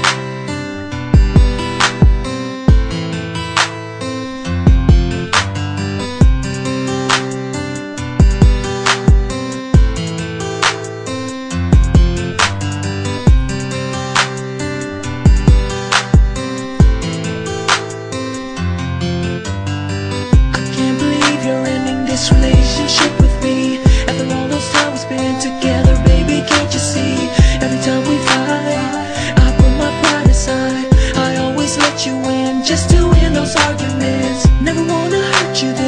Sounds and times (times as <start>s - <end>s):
Music: 0.0s - 35.8s.